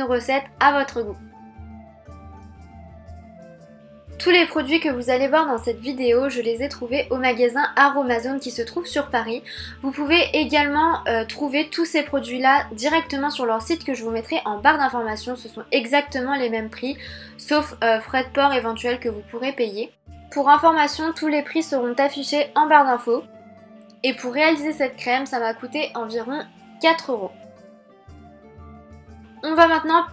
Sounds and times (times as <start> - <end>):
Speech: 0.0 - 1.2, 4.2 - 23.3, 23.9 - 27.4, 29.4 - 30.1
Music: 0.0 - 30.1.